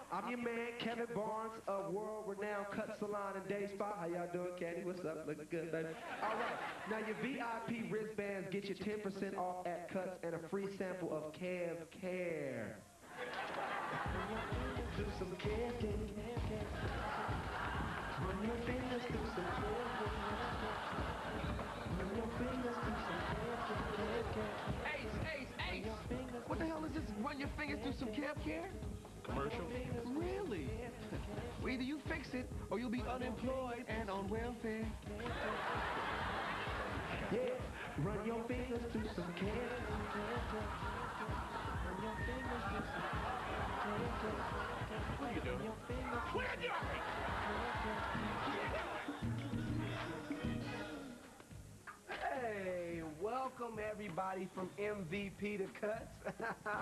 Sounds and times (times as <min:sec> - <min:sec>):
Speech: 0:00.0 - 0:12.9, 0:21.9 - 0:35.5, 0:52.1 - 0:56.2
Music: 0:13.4 - 0:56.8.